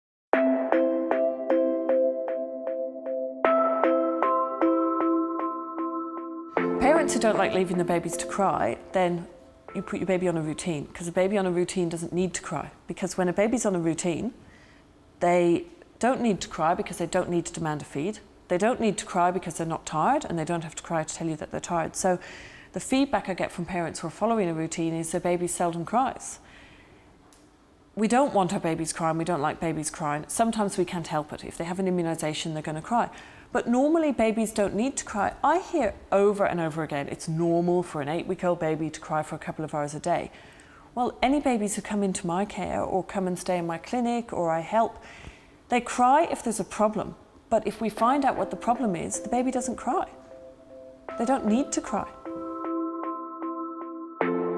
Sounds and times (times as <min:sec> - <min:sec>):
Speech: 0:06.8 - 0:14.4, 0:15.2 - 0:22.2, 0:22.8 - 0:26.4, 0:28.0 - 0:40.3, 0:41.0 - 0:45.0, 0:45.7 - 0:50.2, 0:51.2 - 0:52.2.